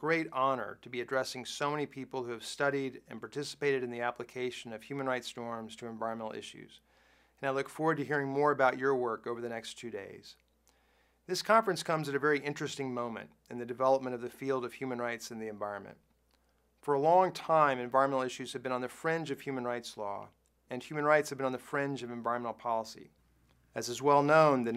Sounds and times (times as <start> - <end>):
Male speech, man speaking: 0.0 - 6.8, 7.4 - 10.4, 11.3 - 16.0, 16.8 - 23.1, 23.8 - 24.7.